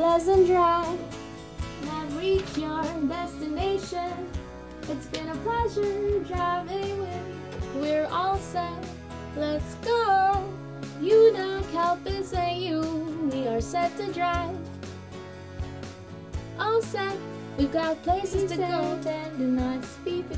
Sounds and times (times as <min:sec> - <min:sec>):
Female singing: 0:00.0 - 0:01.1, 0:01.8 - 0:04.3, 0:04.9 - 0:14.6, 0:16.6 - 0:20.3
Music: 0:00.0 - 0:20.3.